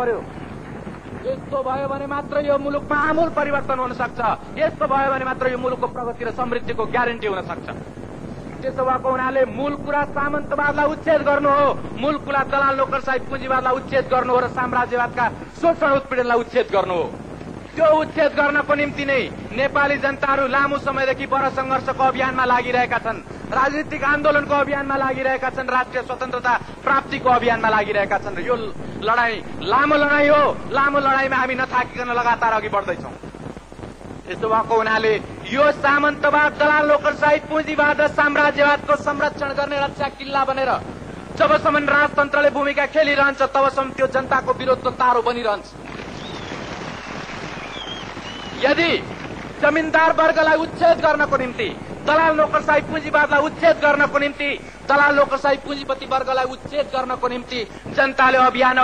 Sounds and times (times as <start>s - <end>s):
Male speech, man speaking: 0.0s - 0.3s, 1.2s - 7.8s, 8.6s - 17.1s, 17.7s - 33.2s, 34.3s - 40.8s, 41.4s - 45.8s, 48.6s - 58.8s
Narration, monologue: 0.0s - 46.6s, 47.4s - 58.8s.